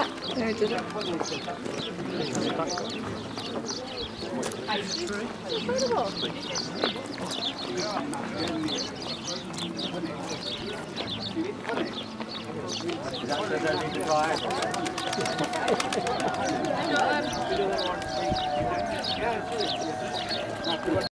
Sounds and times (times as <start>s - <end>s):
Speech: 0.0s - 21.1s
Bird: 5.8s - 21.1s.